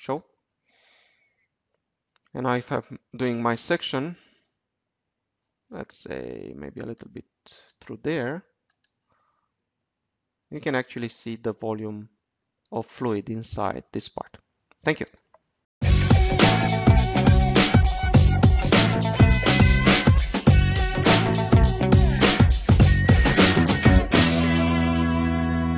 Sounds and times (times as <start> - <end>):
Speech: 0.0 - 0.3, 2.3 - 4.2, 5.7 - 8.5, 10.5 - 15.2
Clicking: 1.7 - 2.3, 8.7 - 9.0.